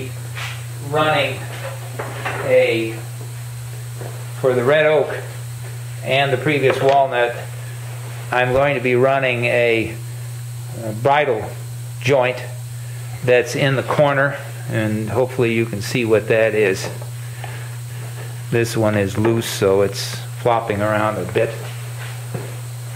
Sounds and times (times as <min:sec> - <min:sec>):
Speech: 0:00.8 - 0:01.6, 0:02.4 - 0:03.1, 0:04.4 - 0:05.3, 0:06.0 - 0:07.5, 0:08.3 - 0:10.0, 0:10.7 - 0:12.6, 0:13.2 - 0:17.0, 0:18.5 - 0:21.7.